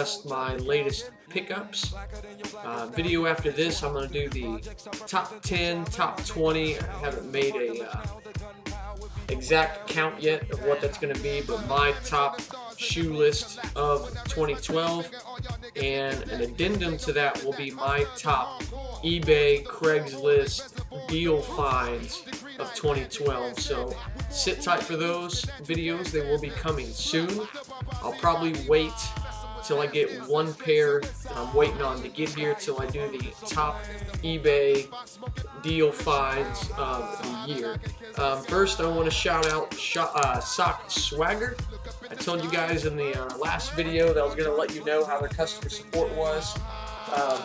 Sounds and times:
Speech: 0.0s - 2.0s, 2.6s - 8.1s, 9.3s - 15.2s, 15.8s - 34.9s, 35.5s - 47.4s
Music: 0.0s - 47.4s.

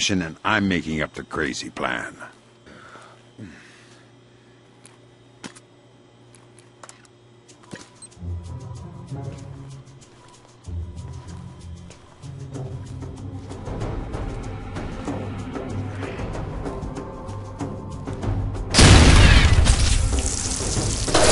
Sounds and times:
Music: 7.4s - 21.3s
Boom: 18.8s - 21.3s.

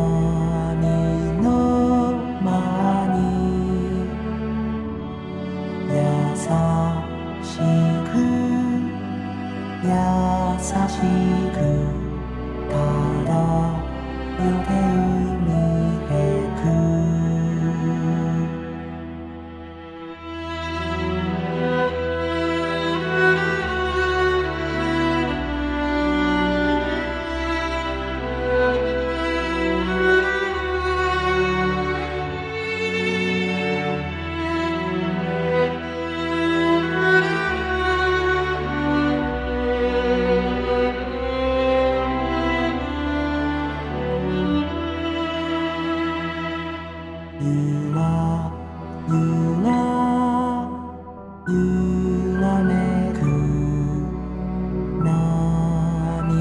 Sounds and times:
Lullaby: 0.0s - 56.4s.

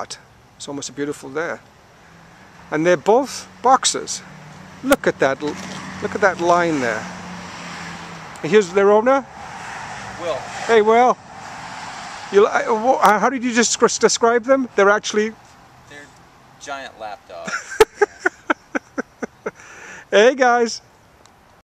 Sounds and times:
Speech: 12.4s - 17.5s, 20.1s - 20.8s.

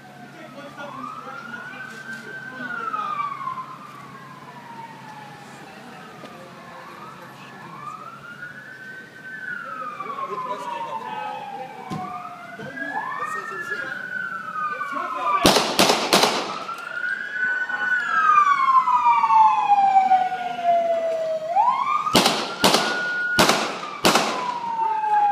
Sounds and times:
Police car (siren): 0.0s - 25.3s.

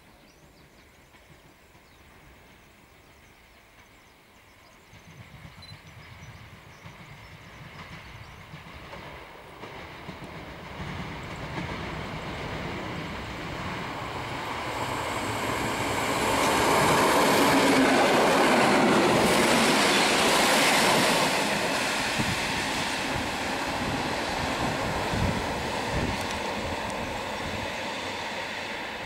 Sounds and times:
Railroad car, train wagon: 0.0s - 29.0s
Train: 0.0s - 29.0s.

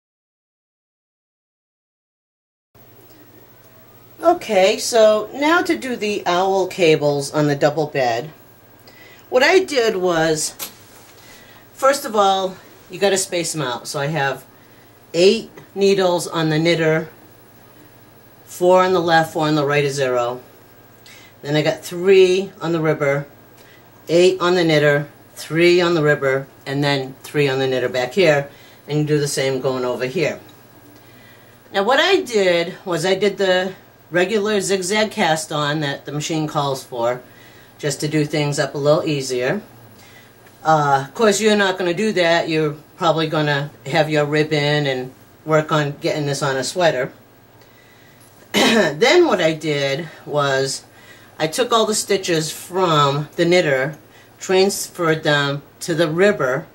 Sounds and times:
Speech: 4.2s - 8.4s, 9.3s - 10.7s, 11.8s - 14.5s, 15.1s - 17.2s, 18.5s - 20.5s, 21.4s - 23.3s, 24.0s - 30.5s, 31.7s - 37.2s, 37.8s - 39.7s, 40.6s - 47.2s, 48.6s - 56.7s.

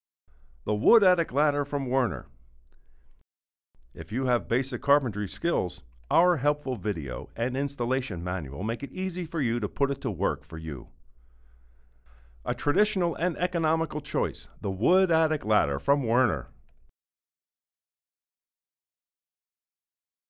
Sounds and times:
Speech: 0.6s - 2.3s, 3.9s - 11.0s, 12.4s - 16.6s.

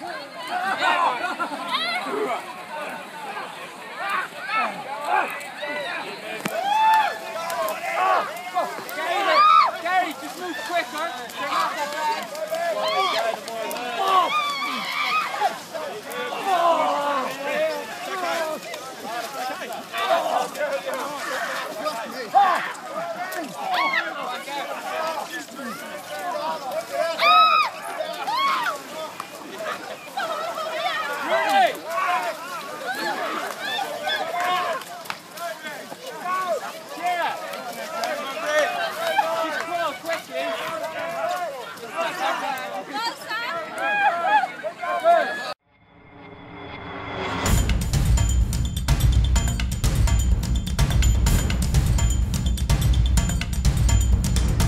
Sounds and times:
Speech: 0.0s - 45.6s.

